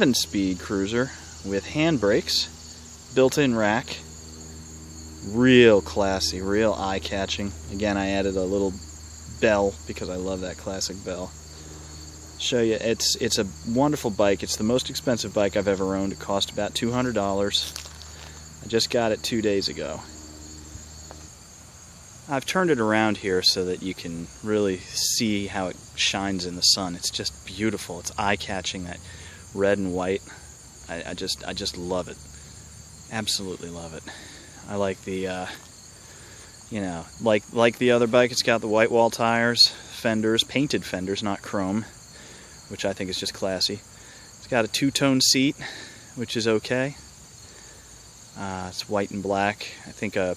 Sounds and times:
Speech: 0.0s - 4.1s, 5.2s - 11.4s, 12.4s - 17.8s, 18.6s - 20.2s, 22.3s - 32.2s, 33.1s - 35.7s, 36.7s - 42.0s, 42.7s - 47.1s, 48.4s - 50.3s.

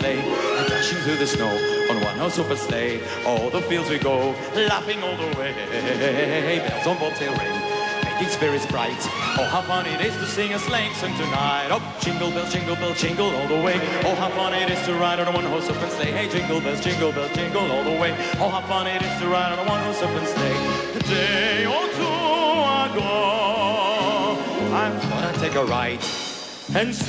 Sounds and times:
Music: 0.0s - 27.0s.

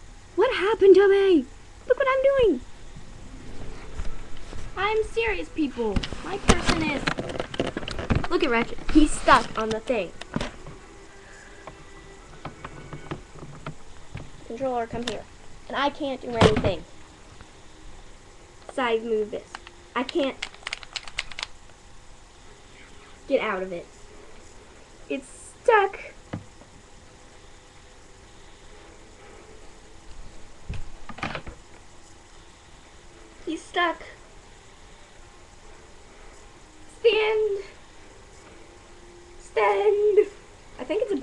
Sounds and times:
Mechanisms: 0.0s - 41.2s.

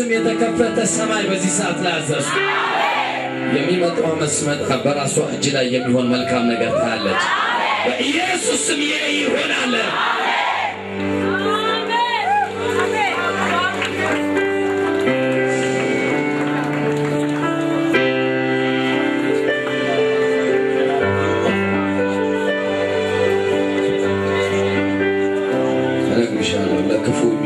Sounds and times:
Music: 0.0s - 27.4s.

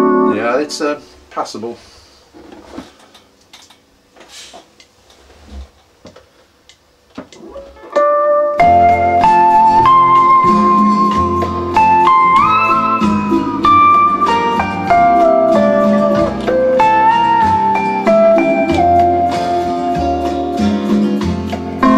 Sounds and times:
Steel guitar, slide guitar: 7.4s - 21.9s.

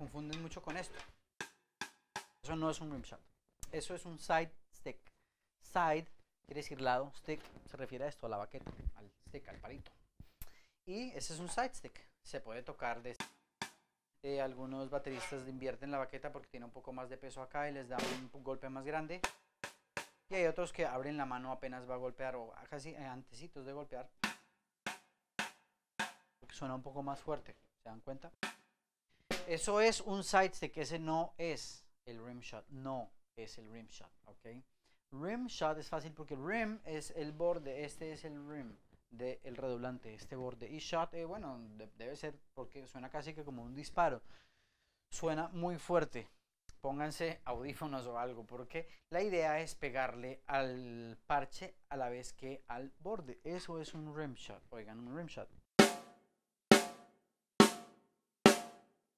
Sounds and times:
Snare drum: 18.0s - 18.3s, 19.2s - 20.2s, 24.2s - 26.2s, 29.3s - 29.6s, 55.8s - 58.8s.

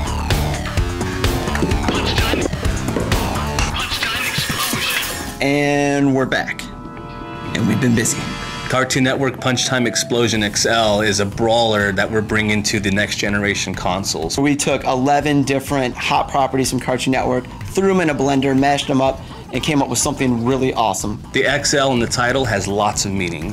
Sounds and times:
Music: 0.0s - 23.5s
Speech: 3.6s - 6.7s, 7.6s - 23.5s.

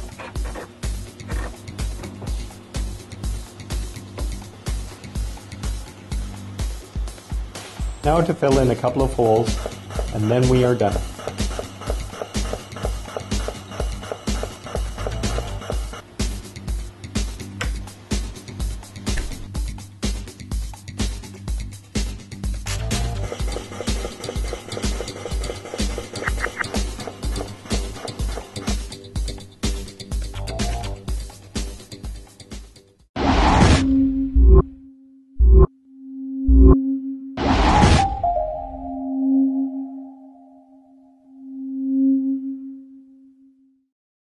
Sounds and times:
Music: 0.0s - 33.1s, 38.0s - 41.3s.

